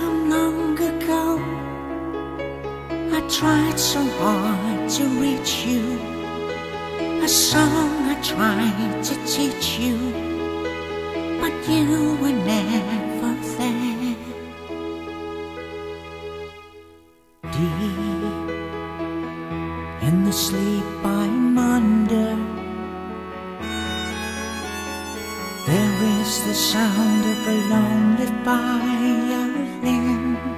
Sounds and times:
Violin, fiddle: 3.1s - 16.8s, 19.9s - 30.5s.

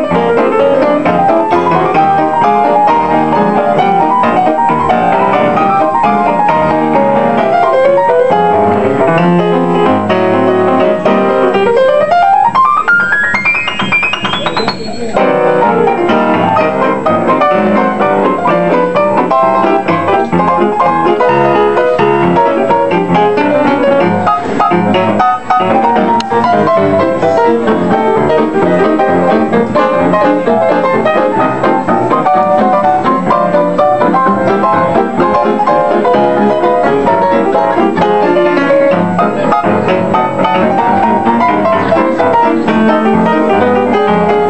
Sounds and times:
Music: 0.0s - 44.4s
Speech: 14.4s - 15.4s.

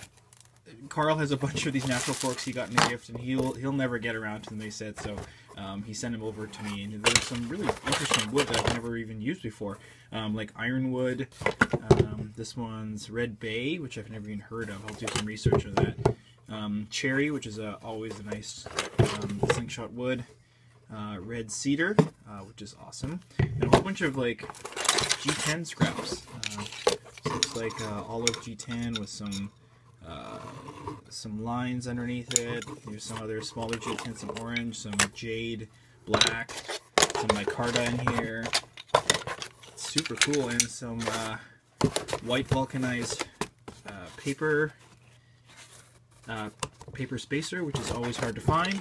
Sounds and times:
Speech: 0.7s - 20.3s, 20.9s - 38.6s, 39.8s - 41.5s, 42.2s - 44.8s, 46.2s - 48.8s.

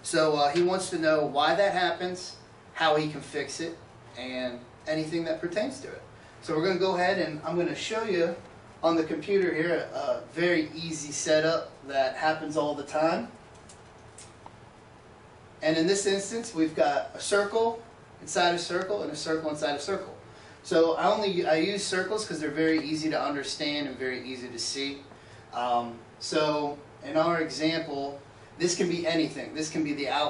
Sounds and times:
Speech: 0.0s - 13.4s, 15.6s - 30.2s.

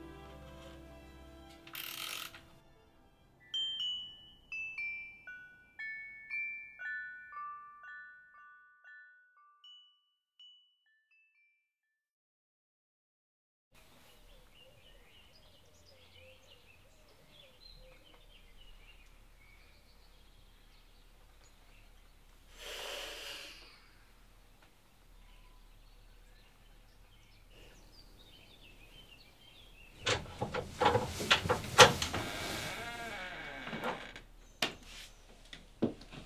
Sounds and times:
Environmental noise: 0.0s - 6.6s, 13.8s - 36.2s
Bird vocalization, bird call, bird song: 13.8s - 22.3s, 24.9s - 30.1s.

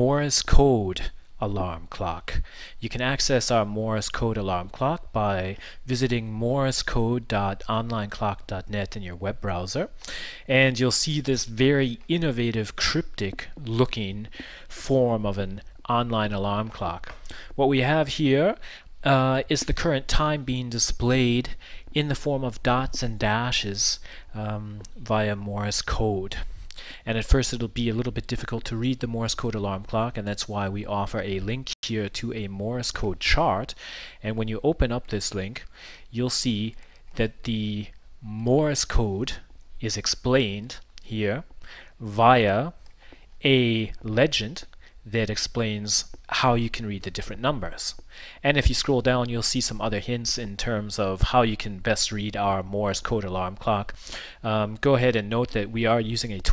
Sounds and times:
Speech: 0.0s - 42.8s, 43.4s - 56.5s.

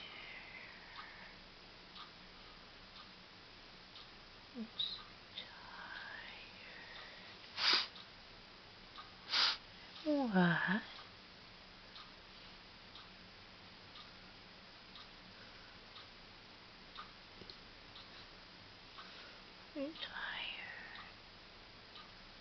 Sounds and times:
Speech: 10.0s - 10.9s, 19.8s - 20.1s.

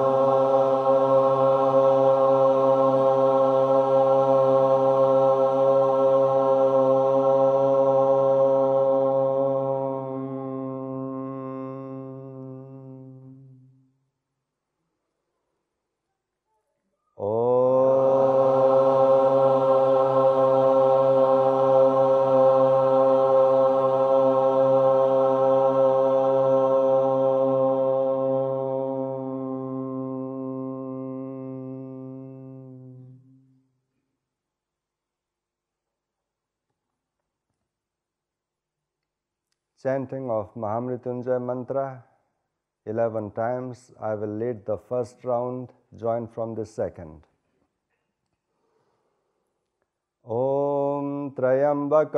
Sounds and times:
Mantra: 0.0s - 13.8s, 17.2s - 33.5s, 42.9s - 47.2s, 50.3s - 52.1s.

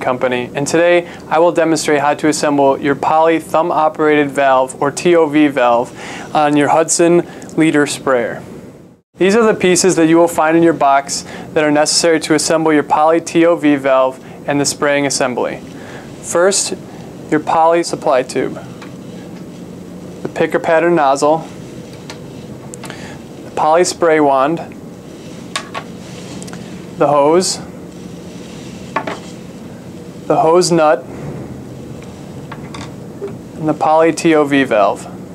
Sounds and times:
Speech: 0.0s - 8.4s, 9.2s - 15.6s, 16.2s - 18.7s, 20.2s - 21.5s, 23.6s - 24.8s, 27.0s - 27.7s, 30.3s - 31.1s, 33.6s - 35.2s.

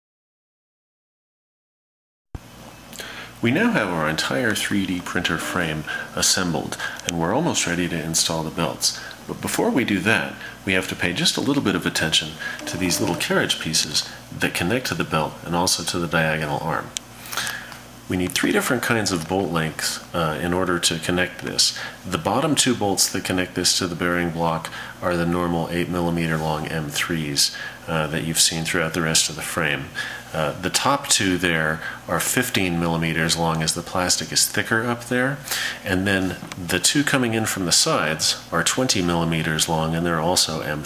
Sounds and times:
Speech: 3.4s - 17.0s, 18.1s - 40.8s.

